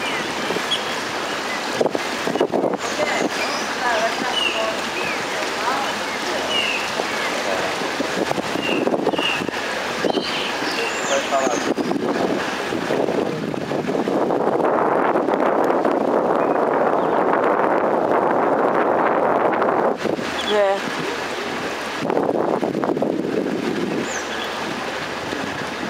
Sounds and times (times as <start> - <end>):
Sailboat, sailing ship: 0.0 - 25.9.